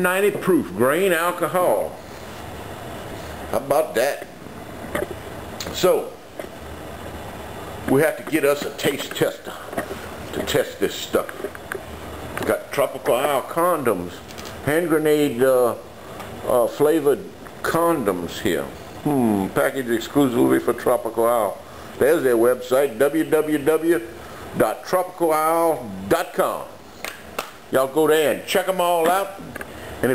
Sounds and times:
Speech: 0:00.0 - 0:02.0, 0:03.5 - 0:04.3, 0:05.6 - 0:06.2, 0:07.9 - 0:11.4, 0:12.4 - 0:15.8, 0:16.4 - 0:26.8, 0:27.7 - 0:30.1
Inside, small room: 0:00.0 - 0:30.1.

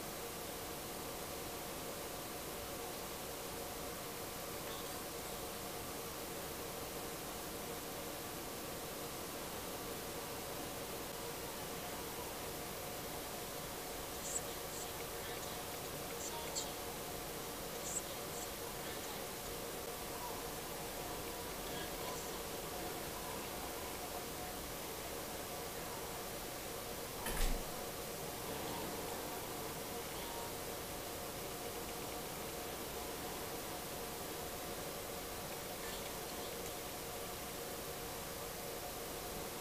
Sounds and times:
Speech: 0:11.4 - 0:12.7, 0:14.1 - 0:26.2, 0:28.4 - 0:30.7, 0:35.6 - 0:37.0.

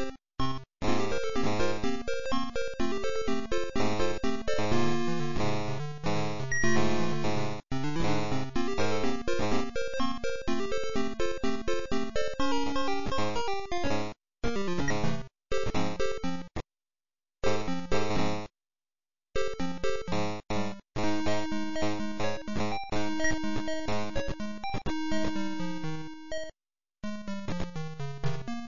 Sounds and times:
Music: 0:00.0 - 0:16.6, 0:17.4 - 0:18.5, 0:19.4 - 0:28.6.

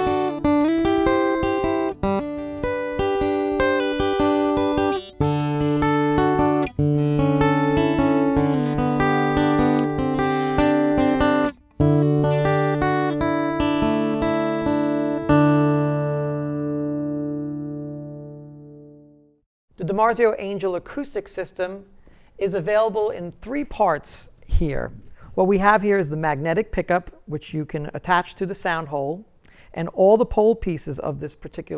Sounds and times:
Acoustic guitar: 0:00.0 - 0:19.4.

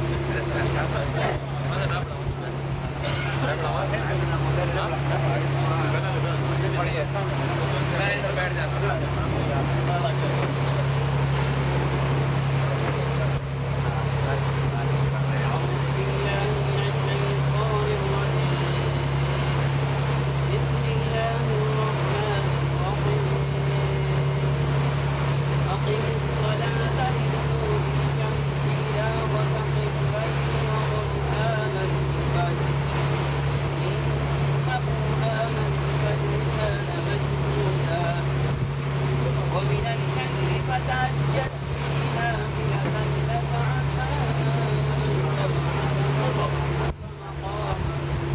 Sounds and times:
Motorboat, speedboat: 0:00.0 - 0:48.3
Waves, surf: 0:00.0 - 0:48.3.

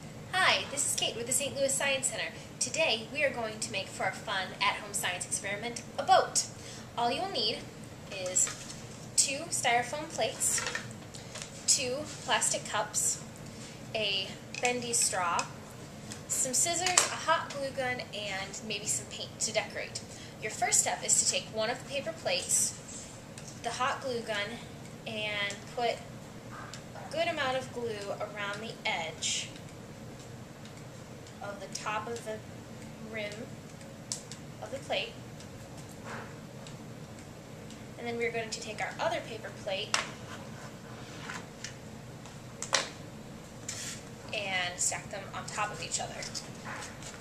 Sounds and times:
Speech: 0:00.4 - 0:08.6, 0:09.2 - 0:10.8, 0:11.7 - 0:13.2, 0:14.0 - 0:15.6, 0:16.3 - 0:22.8, 0:23.6 - 0:26.0, 0:27.0 - 0:29.6, 0:31.4 - 0:32.4, 0:33.0 - 0:33.5, 0:34.6 - 0:35.2, 0:38.0 - 0:40.0, 0:44.3 - 0:46.5.

